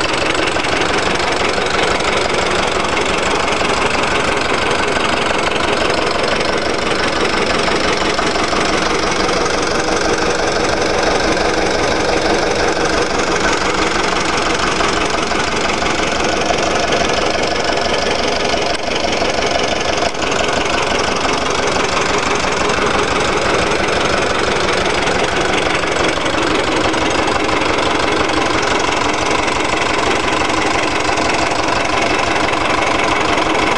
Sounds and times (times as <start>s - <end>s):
Heavy engine (low frequency): 0.0s - 33.7s
Idling: 0.0s - 33.7s
Vehicle: 0.0s - 33.7s.